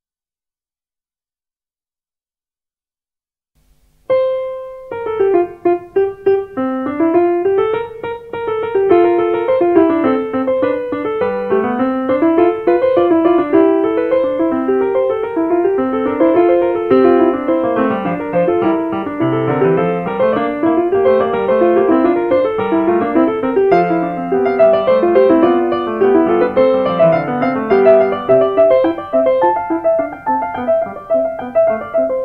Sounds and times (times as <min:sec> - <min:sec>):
Music: 0:04.0 - 0:32.2.